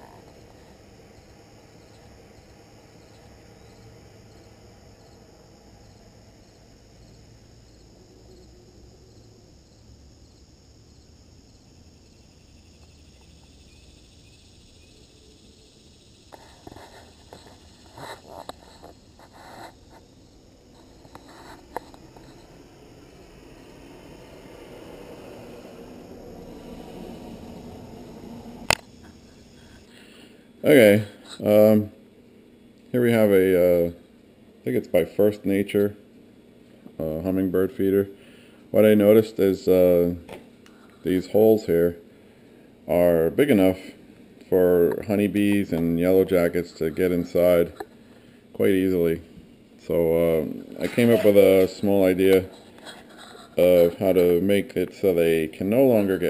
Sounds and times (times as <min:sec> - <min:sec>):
Bee, wasp, etc.: 0:00.0 - 0:31.8.